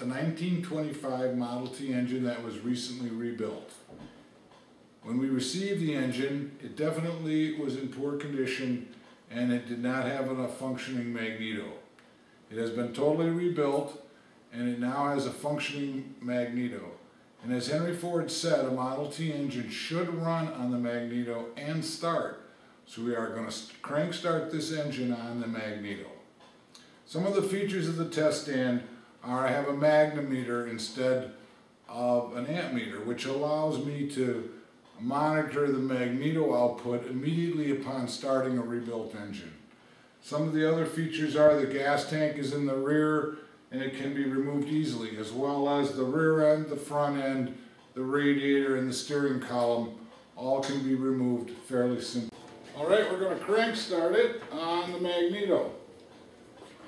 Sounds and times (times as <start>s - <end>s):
Speech: 0.0s - 4.0s, 5.0s - 11.9s, 12.5s - 56.0s.